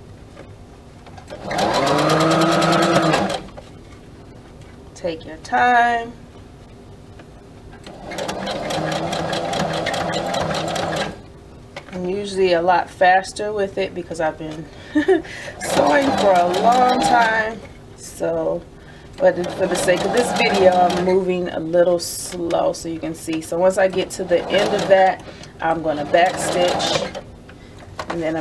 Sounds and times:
Sewing machine: 1.3s - 3.5s, 7.8s - 11.2s, 15.6s - 17.5s, 19.2s - 21.2s, 23.8s - 27.3s
Speech: 5.0s - 6.2s, 11.9s - 14.7s, 15.6s - 27.2s, 28.1s - 28.4s.

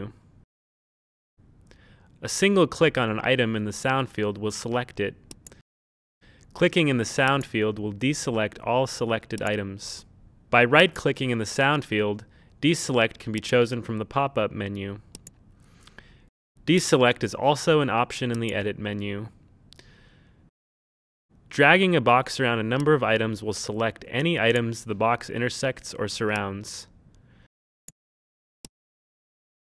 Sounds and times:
Speech: 2.2s - 5.2s, 6.5s - 10.0s, 10.6s - 15.0s, 16.6s - 19.3s, 21.5s - 26.9s.

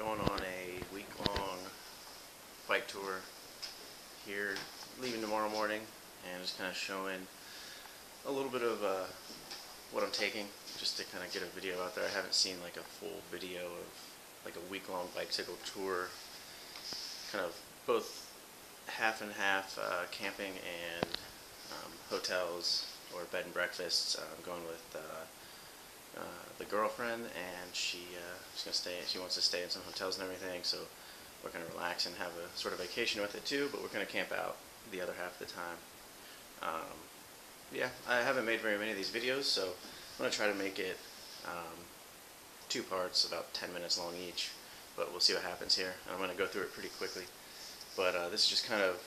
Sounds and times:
Speech: 0.0s - 1.8s, 2.7s - 3.3s, 4.2s - 7.4s, 8.2s - 9.2s, 9.9s - 16.2s, 17.3s - 18.3s, 18.9s - 25.4s, 26.1s - 35.9s, 36.6s - 37.1s, 37.7s - 41.9s, 42.7s - 47.3s, 47.9s - 49.0s.

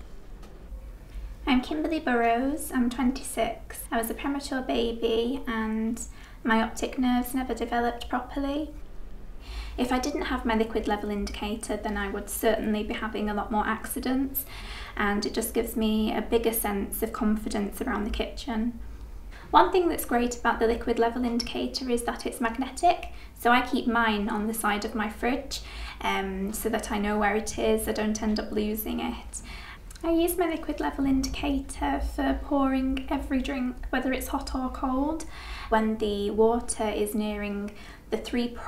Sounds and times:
Speech: 1.4s - 8.8s, 9.8s - 18.8s, 19.5s - 38.6s.

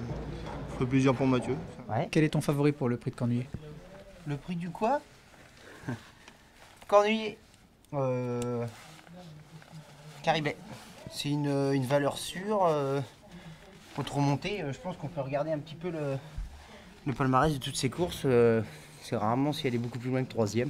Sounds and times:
Speech: 17.0s - 20.7s.

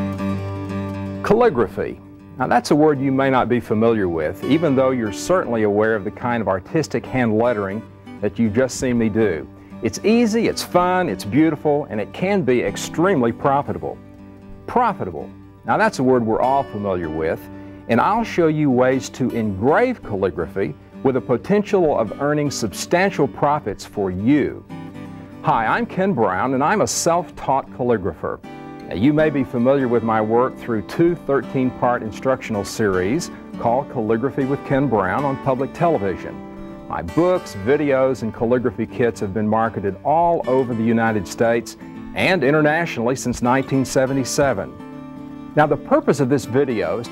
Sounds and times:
Music: 0.0s - 47.1s
Speech: 1.2s - 14.0s, 14.7s - 24.6s, 25.5s - 44.8s, 45.6s - 47.1s.

